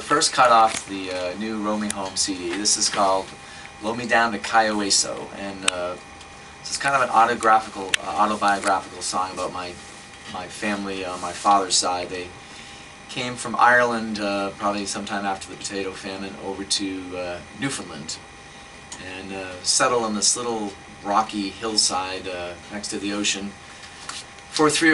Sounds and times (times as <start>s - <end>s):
Speech: 0.0s - 6.0s, 6.6s - 12.4s, 13.1s - 18.2s, 19.0s - 23.6s, 24.6s - 24.9s.